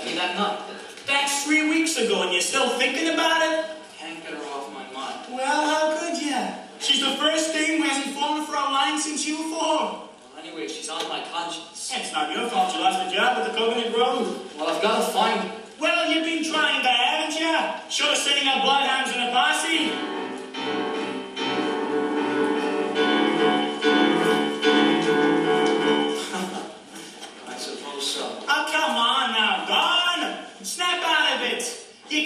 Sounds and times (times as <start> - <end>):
Speech: 0.0 - 20.0, 27.4 - 32.2.